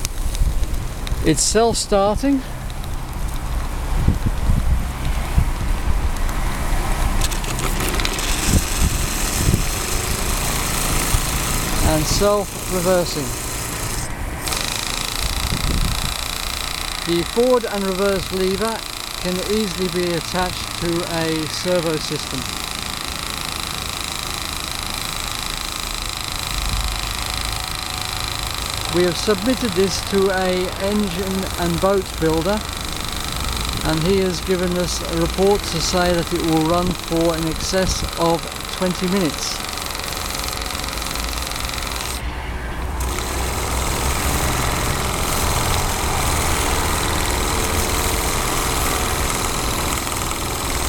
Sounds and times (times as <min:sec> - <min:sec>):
Speech: 0:01.2 - 0:02.5, 0:11.8 - 0:13.3, 0:17.1 - 0:22.4, 0:28.9 - 0:32.6, 0:33.8 - 0:39.6.